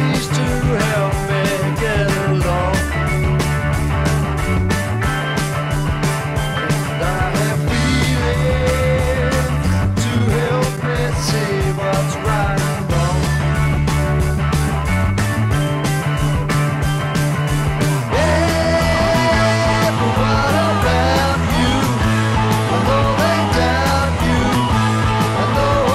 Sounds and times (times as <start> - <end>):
Music: 0.0 - 25.9.